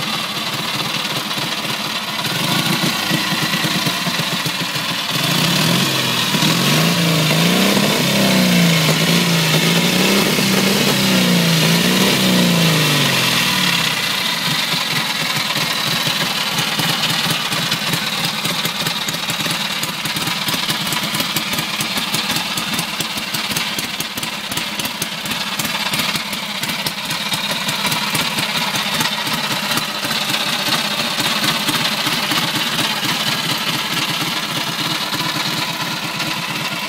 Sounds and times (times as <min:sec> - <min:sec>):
Idling: 0:00.0 - 0:36.8
Medium engine (mid frequency): 0:00.0 - 0:36.8
Vehicle: 0:00.0 - 0:36.8.